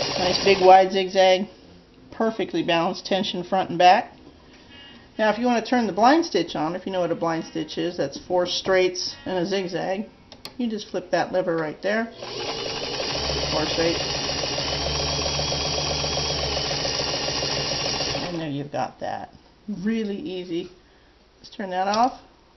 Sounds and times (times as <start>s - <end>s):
Sewing machine: 0.0s - 0.7s, 12.2s - 18.4s
Speech: 0.2s - 1.5s, 2.2s - 4.1s, 5.2s - 12.2s, 13.5s - 14.1s, 18.4s - 20.8s, 21.4s - 22.2s.